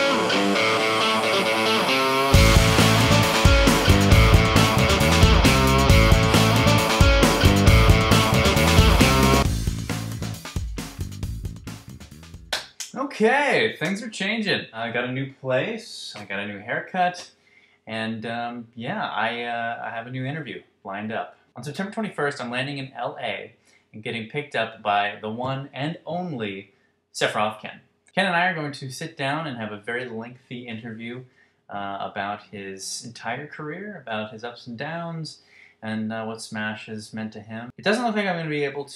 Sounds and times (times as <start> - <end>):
Speech: 12.9 - 38.9.